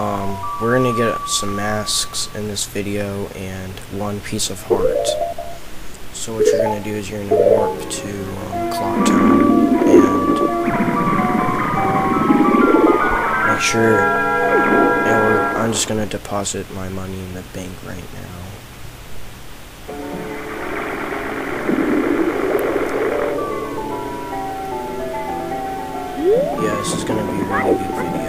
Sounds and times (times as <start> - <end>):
Music: 0.0 - 3.0, 4.6 - 5.6, 6.4 - 15.9, 19.9 - 28.2
Speech: 0.0 - 5.2, 6.2 - 10.4, 13.5 - 14.1, 15.0 - 18.6, 26.3 - 28.2.